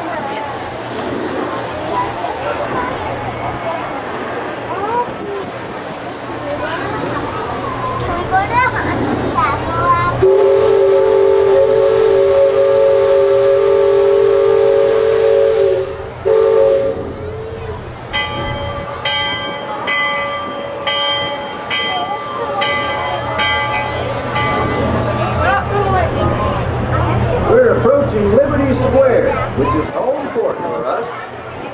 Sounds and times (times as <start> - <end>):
Train whistle: 10.2 - 17.5.